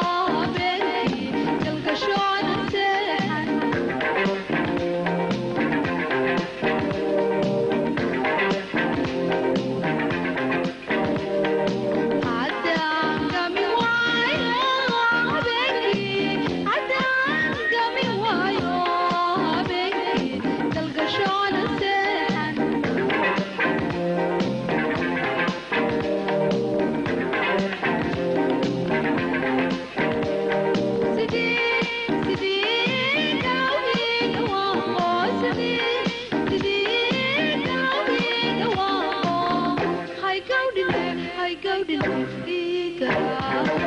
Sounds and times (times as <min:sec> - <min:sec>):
Music: 0:00.0 - 0:43.8.